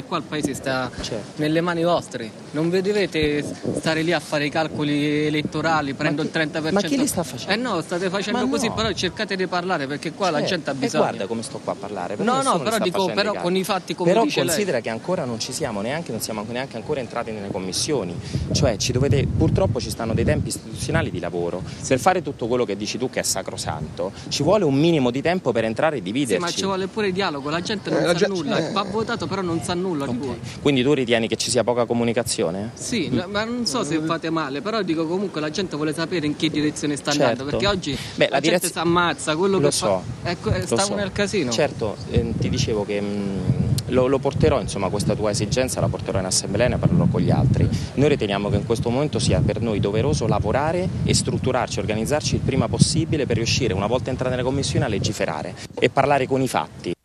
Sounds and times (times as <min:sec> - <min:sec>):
Speech: 0:00.0 - 0:57.0.